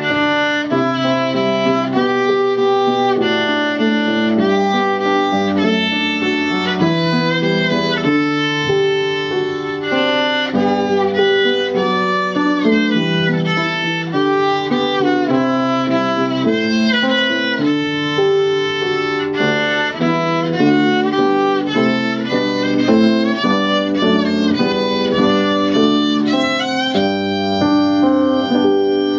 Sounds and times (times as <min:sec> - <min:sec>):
Violin, fiddle: 0:00.0 - 0:29.1.